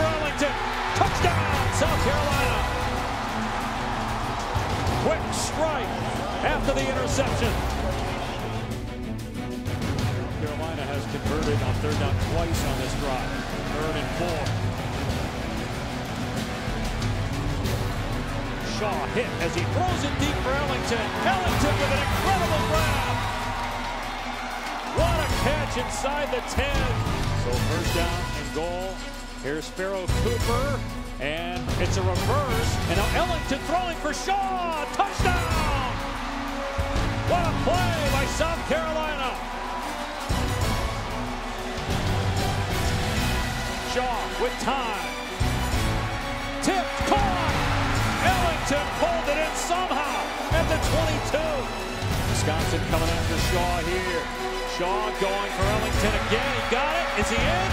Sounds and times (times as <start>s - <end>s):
Music: 0.0s - 57.7s
Speech: 5.1s - 7.6s, 10.4s - 14.5s, 18.7s - 23.0s, 25.0s - 36.0s, 52.4s - 57.7s.